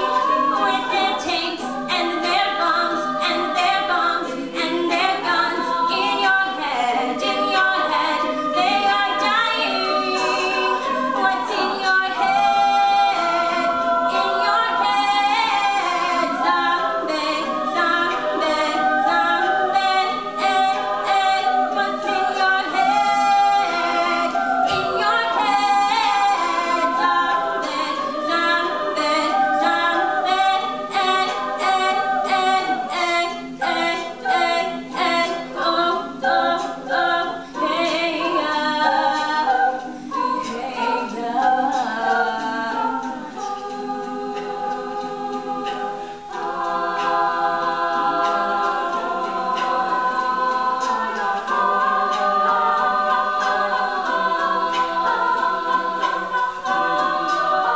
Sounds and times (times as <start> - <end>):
A capella: 0.0 - 57.7.